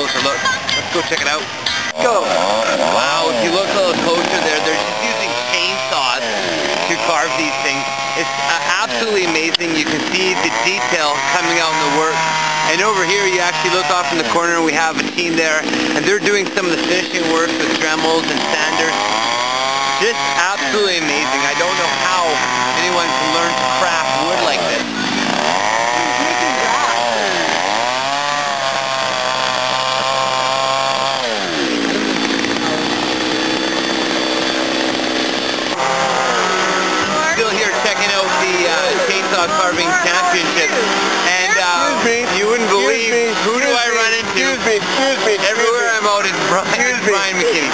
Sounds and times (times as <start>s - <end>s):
Chainsaw: 0.0s - 47.7s
Speech: 2.0s - 6.3s, 37.1s - 47.7s.